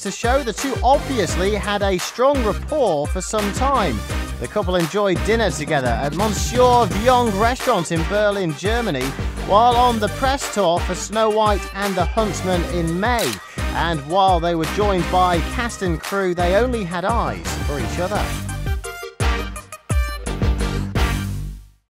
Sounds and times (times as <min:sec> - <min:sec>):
Speech: 0:00.0 - 0:18.4
Music: 0:00.0 - 0:21.9.